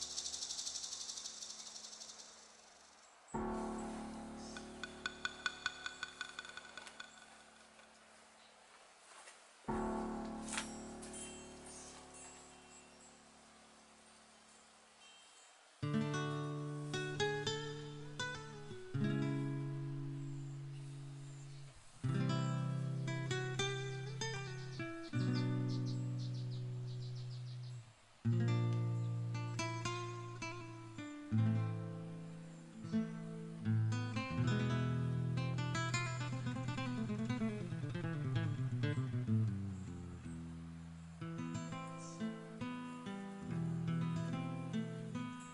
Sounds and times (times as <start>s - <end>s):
Music: 3.4s - 7.2s, 9.7s - 13.0s, 15.8s - 45.5s.